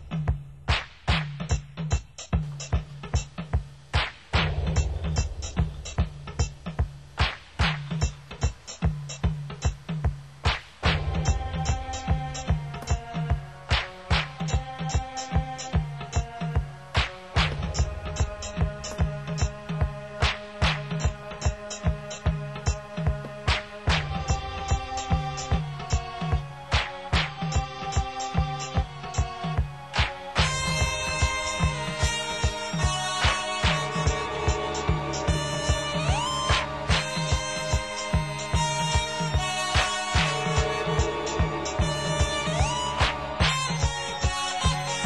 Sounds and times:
Music: 0.0 - 45.0.

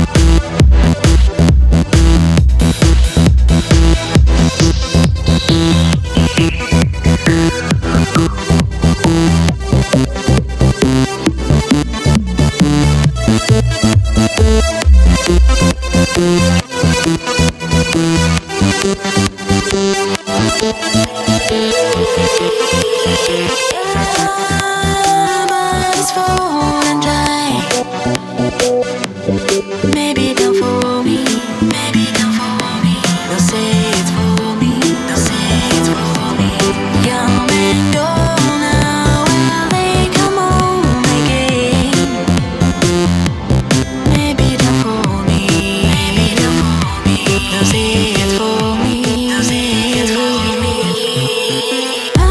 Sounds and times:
Music: 0.0 - 52.3.

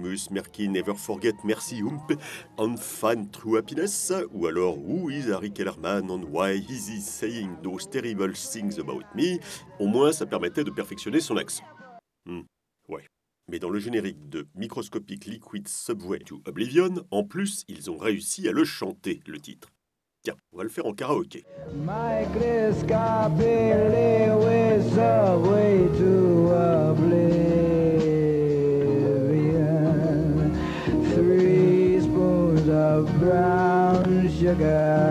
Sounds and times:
Speech: 0.0 - 21.4.

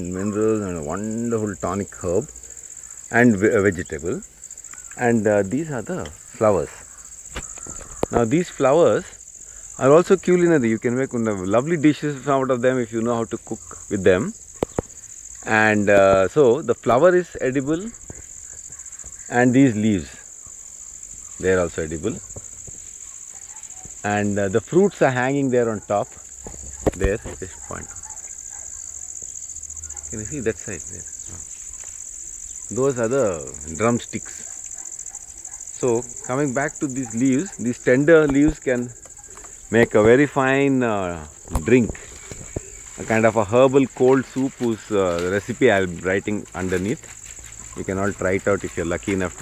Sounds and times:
Speech: 0.0 - 2.4, 3.1 - 4.2, 5.0 - 6.8, 8.1 - 9.2, 9.8 - 14.4, 15.4 - 18.0, 19.3 - 20.3, 21.4 - 22.2, 24.0 - 26.2, 27.0 - 28.0, 30.1 - 31.1, 32.7 - 34.5, 35.8 - 39.0, 39.7 - 42.0, 43.0 - 47.1, 47.7 - 49.4.

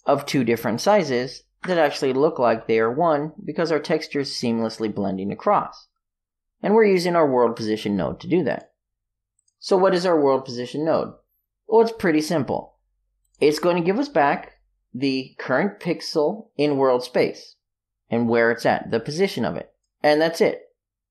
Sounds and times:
Speech: 0.0 - 5.9, 6.6 - 8.7, 9.6 - 12.8, 13.4 - 20.7.

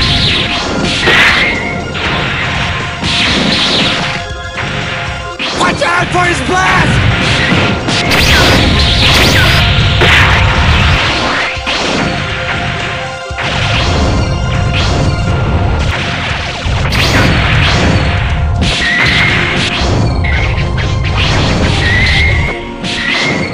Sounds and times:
Music: 0.0 - 23.5.

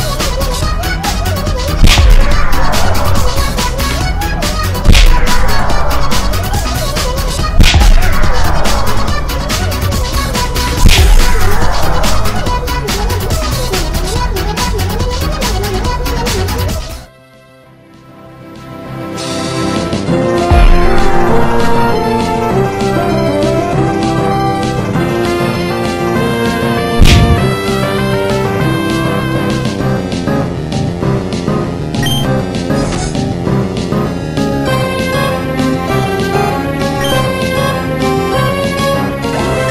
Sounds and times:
Music: 0.0 - 39.7.

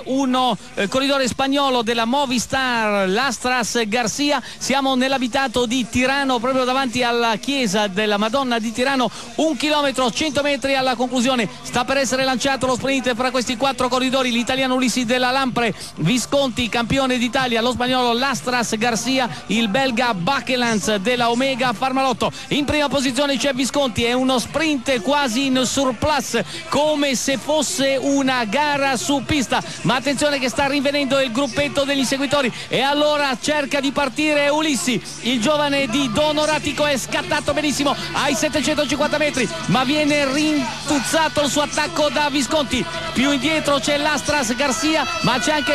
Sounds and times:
Speech: 0.0 - 45.7.

